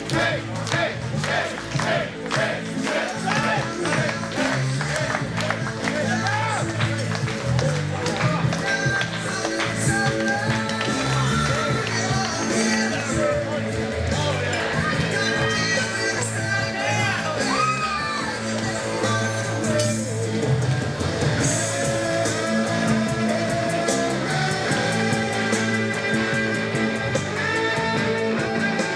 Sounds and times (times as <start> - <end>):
Music: 0.0 - 28.9.